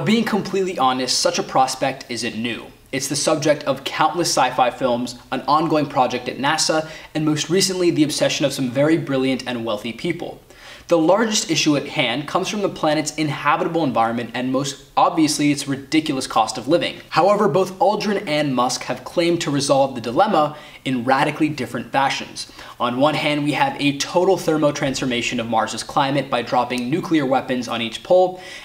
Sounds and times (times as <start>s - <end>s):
Speech: 0.0s - 28.6s.